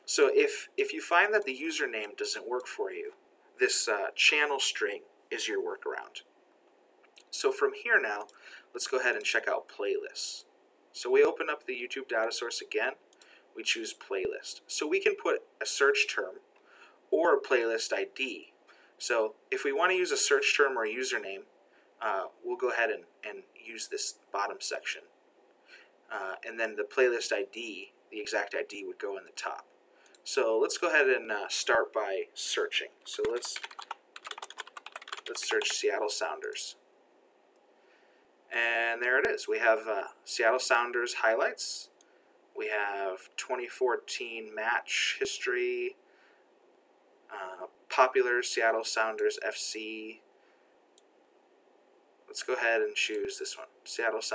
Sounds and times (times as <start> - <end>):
Speech: 0.0 - 6.2, 7.2 - 10.4, 11.0 - 13.0, 13.6 - 16.4, 17.2 - 25.1, 26.1 - 29.6, 30.2 - 33.7, 35.2 - 36.8, 38.5 - 42.0, 42.6 - 46.0, 47.3 - 50.2, 52.3 - 54.3
Computer keyboard: 33.1 - 36.6.